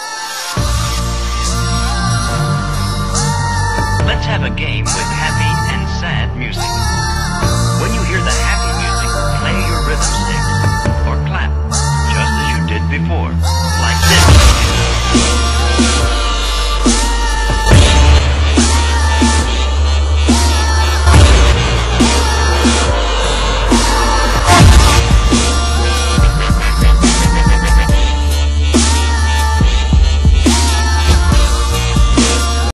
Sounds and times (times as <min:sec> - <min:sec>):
Dubstep: 0:00.0 - 0:32.7.